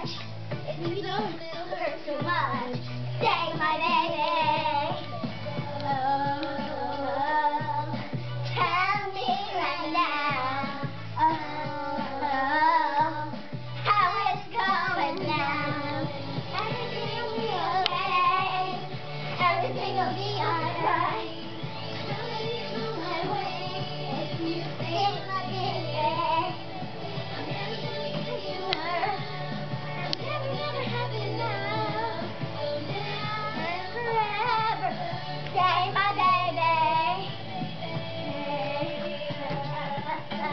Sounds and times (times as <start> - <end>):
Dance music: 0.0 - 40.5.